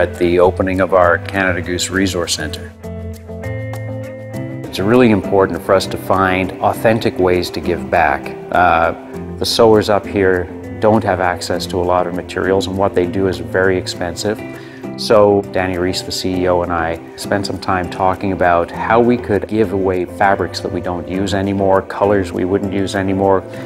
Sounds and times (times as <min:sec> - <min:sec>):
Speech: 0:00.0 - 0:02.8, 0:04.7 - 0:14.4, 0:15.0 - 0:23.5
Music: 0:00.0 - 0:23.6.